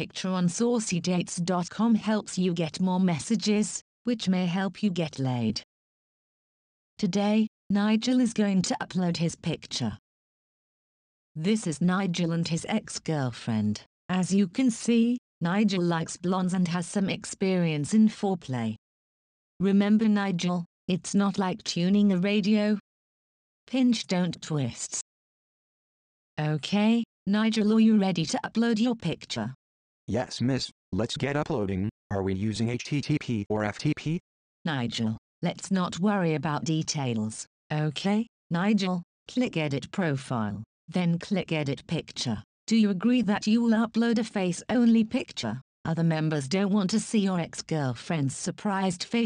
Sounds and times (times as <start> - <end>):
Speech synthesizer: 0.0 - 5.7, 7.0 - 10.0, 11.4 - 18.8, 19.6 - 22.8, 23.7 - 25.1, 26.4 - 49.2.